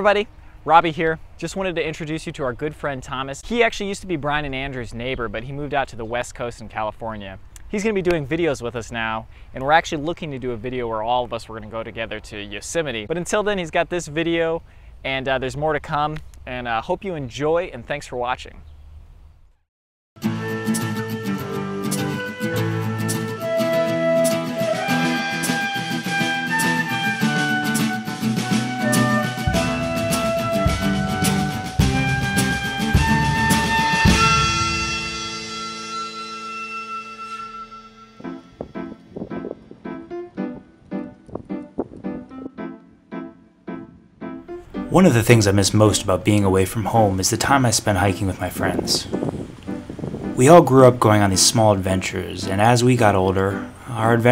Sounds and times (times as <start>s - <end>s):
Acoustic guitar: 20.2s - 37.6s.